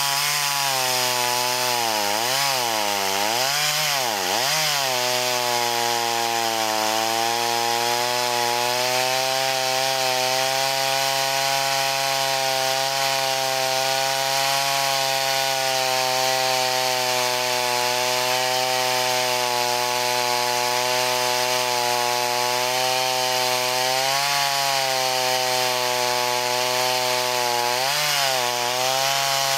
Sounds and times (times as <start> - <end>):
Chainsaw: 0.0 - 29.5.